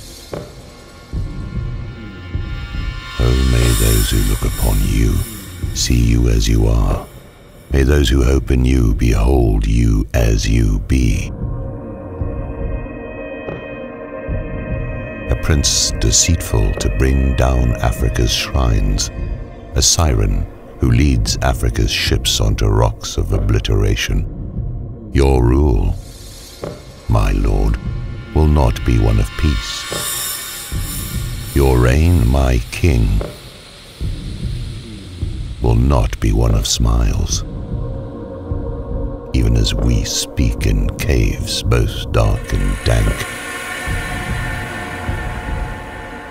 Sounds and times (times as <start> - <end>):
Music: 0.0 - 46.3
Speech: 3.2 - 7.1, 7.7 - 11.4, 15.3 - 19.2, 19.8 - 24.3, 25.1 - 26.1, 27.1 - 30.0, 31.5 - 33.4, 35.6 - 37.5, 39.3 - 44.1.